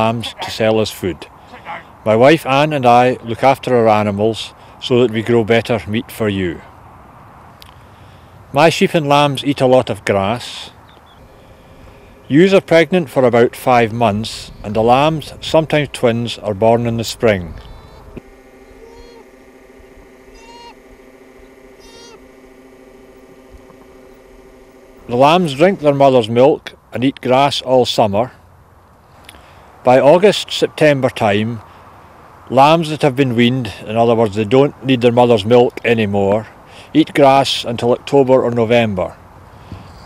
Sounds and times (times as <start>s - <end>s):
Speech: 0.0s - 6.7s, 8.5s - 10.8s, 12.3s - 17.6s, 25.1s - 28.4s, 29.9s - 31.6s, 32.5s - 39.2s.